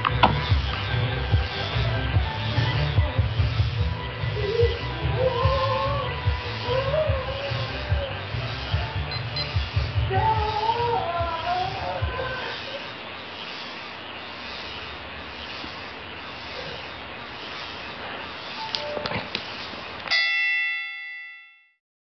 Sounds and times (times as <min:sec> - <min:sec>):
Music: 0:00.0 - 0:12.5.